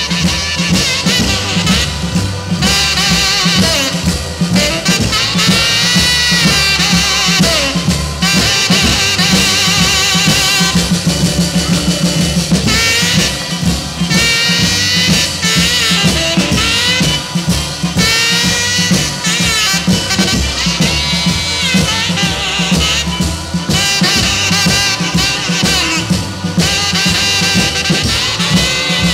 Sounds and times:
Rock and roll: 0.0s - 29.1s.

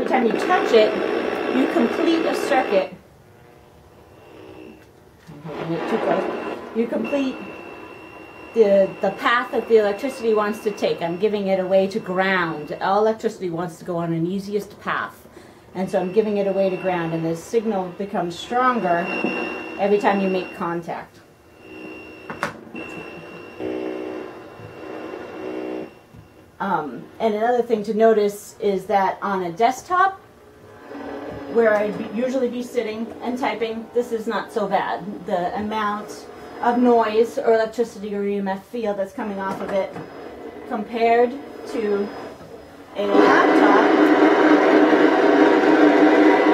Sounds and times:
Speech: 0.0s - 1.0s, 1.6s - 3.0s, 5.3s - 7.5s, 8.6s - 15.2s, 15.8s - 19.1s, 19.8s - 21.2s, 26.6s - 30.2s, 31.6s - 40.0s, 40.7s - 42.1s, 43.0s - 44.0s.

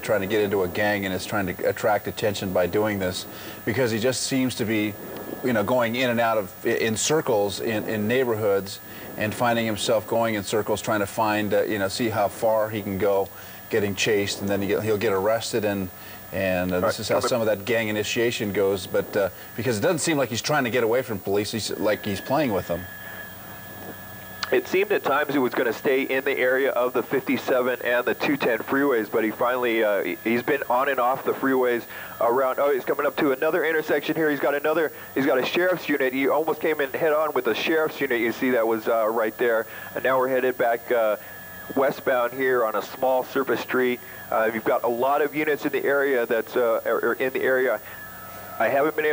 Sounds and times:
Speech: 0.0s - 22.9s, 24.5s - 41.2s, 41.8s - 47.8s, 48.6s - 49.1s.

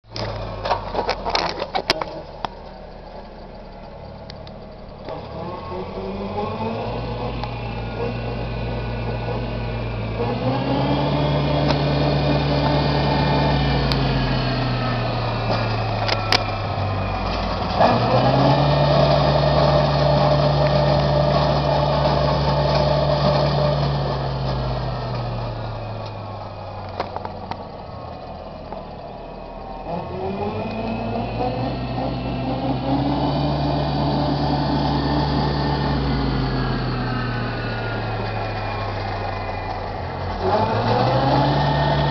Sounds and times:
Vehicle: 0.0s - 42.1s.

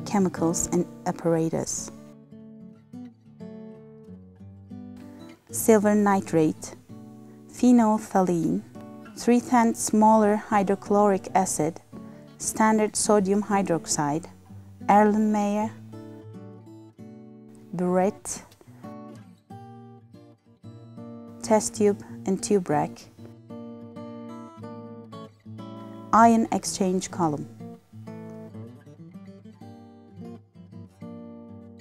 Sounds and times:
Speech: 0.0s - 1.9s, 5.6s - 6.8s, 7.6s - 8.6s, 9.2s - 11.8s, 12.4s - 14.3s, 14.9s - 15.8s, 17.8s - 18.5s, 21.4s - 23.1s, 26.2s - 27.5s
Music: 0.0s - 31.8s.

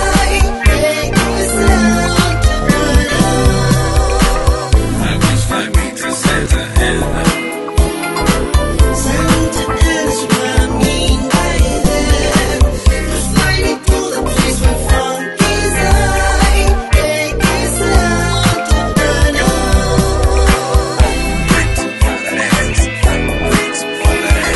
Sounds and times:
Funk: 0.0s - 24.5s.

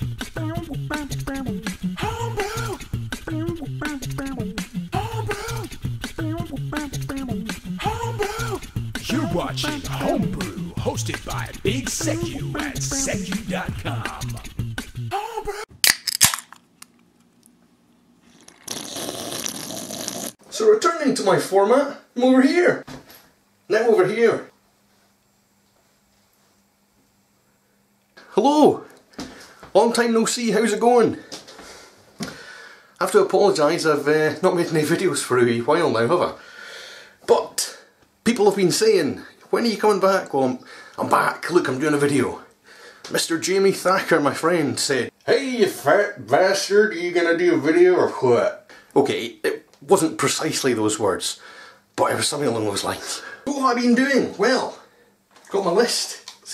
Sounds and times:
Music: 0.0s - 15.6s
Speech: 9.0s - 14.4s, 20.5s - 22.8s, 23.7s - 24.5s, 28.3s - 28.9s, 29.7s - 31.3s, 33.0s - 36.4s, 37.3s - 42.5s, 43.1s - 51.4s, 52.0s - 54.9s, 55.5s - 56.5s.

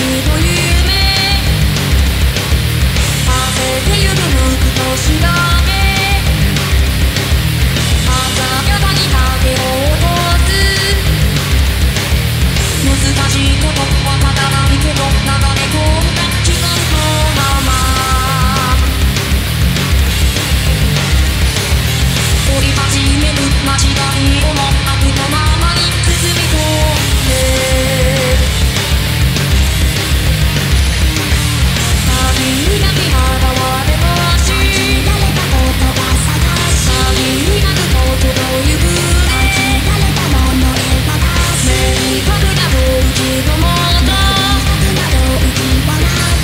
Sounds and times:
Female singing: 0.0s - 1.5s, 3.2s - 6.3s, 8.1s - 11.1s, 12.8s - 18.9s, 22.5s - 28.5s, 31.9s - 46.4s
Music: 0.0s - 46.4s.

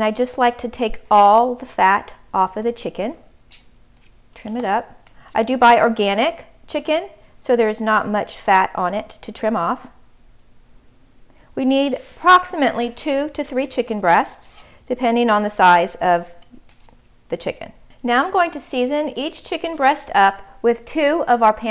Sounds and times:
Speech: 0.0s - 3.2s, 4.4s - 9.9s, 11.6s - 16.4s, 17.3s - 21.7s.

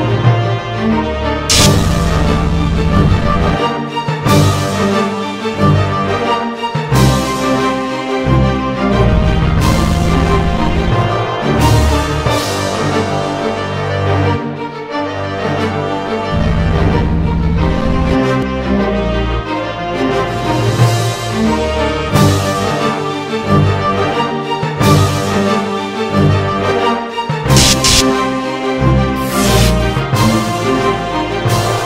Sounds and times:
Music: 0.0s - 31.8s.

